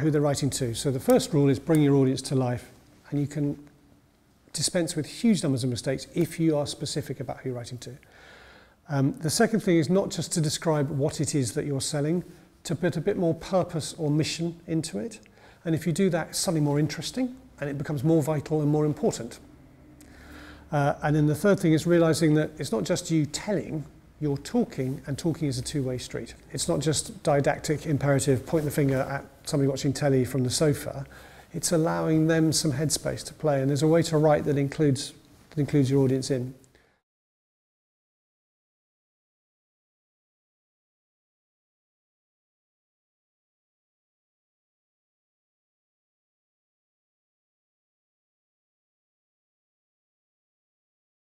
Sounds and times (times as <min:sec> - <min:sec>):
Speech: 0:00.0 - 0:03.7, 0:04.5 - 0:08.0, 0:08.9 - 0:19.5, 0:20.7 - 0:36.6.